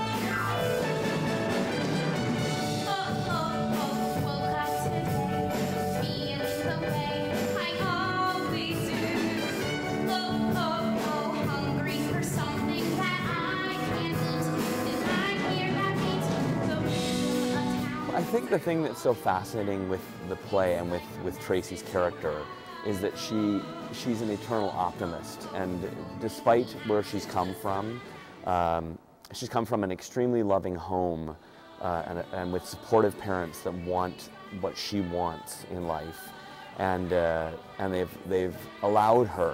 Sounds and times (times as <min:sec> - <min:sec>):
Music: 0:00.0 - 0:39.5.